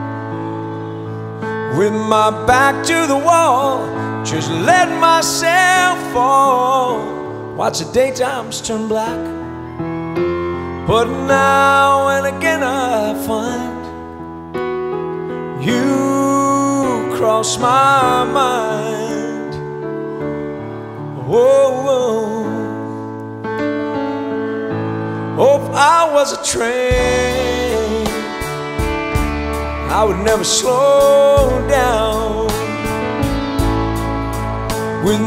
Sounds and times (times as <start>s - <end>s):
Music: 0.0s - 35.2s.